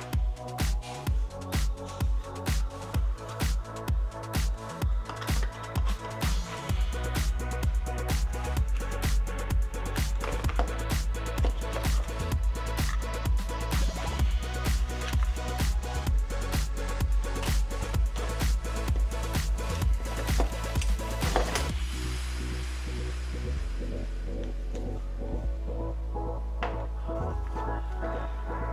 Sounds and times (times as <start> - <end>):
Music: 0.0 - 28.7.